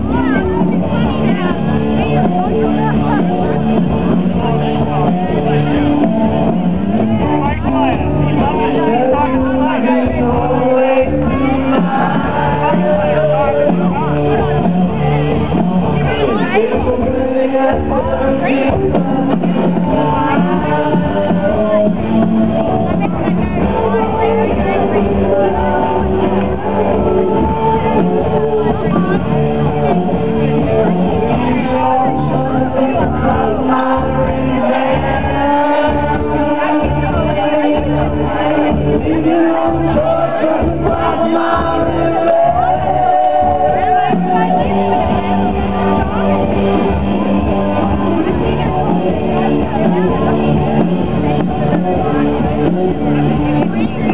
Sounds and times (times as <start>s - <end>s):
Music: 0.0s - 54.1s.